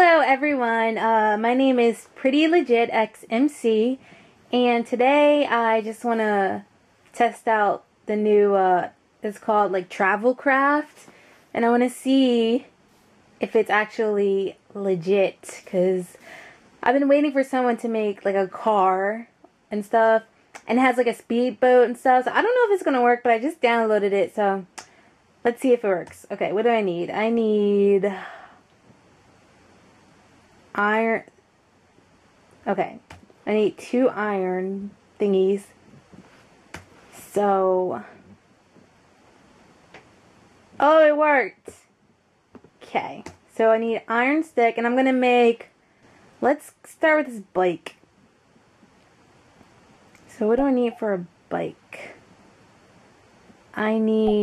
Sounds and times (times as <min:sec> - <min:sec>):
Speech: 0:00.0 - 0:12.7, 0:13.4 - 0:16.2, 0:16.8 - 0:24.8, 0:25.5 - 0:28.4, 0:30.8 - 0:31.3, 0:32.6 - 0:35.7, 0:37.2 - 0:38.2, 0:40.8 - 0:41.9, 0:42.8 - 0:45.7, 0:46.4 - 0:47.9, 0:50.2 - 0:52.2, 0:53.8 - 0:54.4.